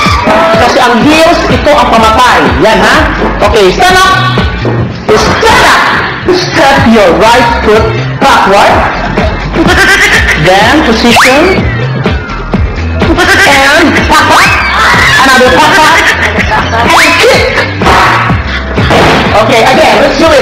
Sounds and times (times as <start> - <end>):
Music: 0.0 - 20.4.